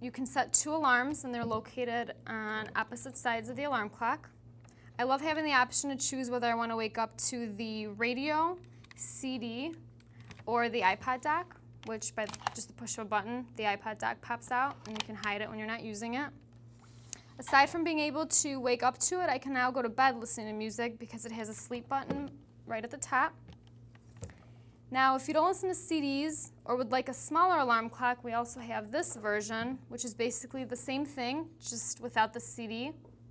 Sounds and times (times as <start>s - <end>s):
Speech: 0.0s - 4.3s, 5.0s - 9.8s, 10.5s - 16.4s, 17.4s - 23.4s, 24.9s - 33.0s.